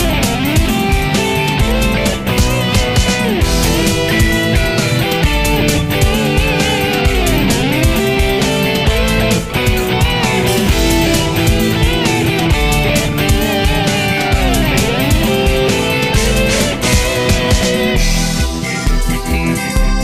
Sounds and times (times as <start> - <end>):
Pop music: 0.0 - 20.0
Video game music: 0.0 - 20.0.